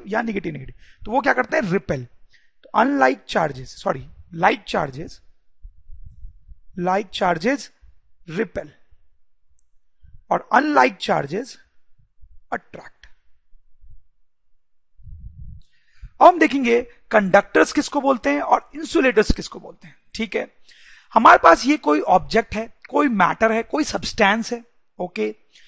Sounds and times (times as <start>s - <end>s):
Speech: 0.0s - 2.1s, 2.7s - 5.2s, 6.8s - 8.8s, 10.3s - 11.6s, 12.5s - 13.1s, 16.2s - 20.5s, 21.1s - 25.4s.